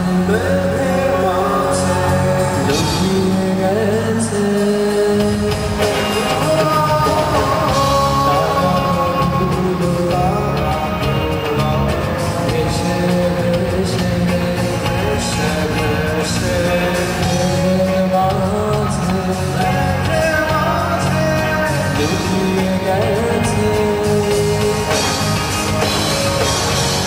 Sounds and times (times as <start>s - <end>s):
Music: 0.0s - 27.0s.